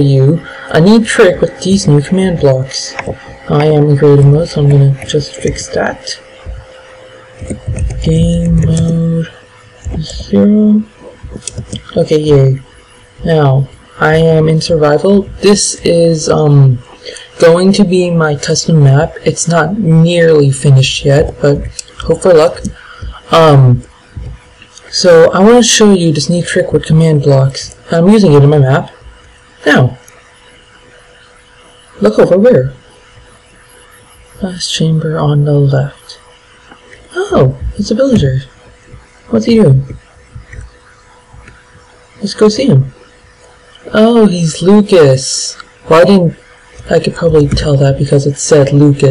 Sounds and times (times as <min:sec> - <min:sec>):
Speech: 0:00.0 - 0:30.1, 0:32.0 - 0:32.9, 0:34.4 - 0:36.3, 0:37.0 - 0:38.7, 0:39.3 - 0:40.7, 0:42.2 - 0:43.0, 0:43.8 - 0:49.1.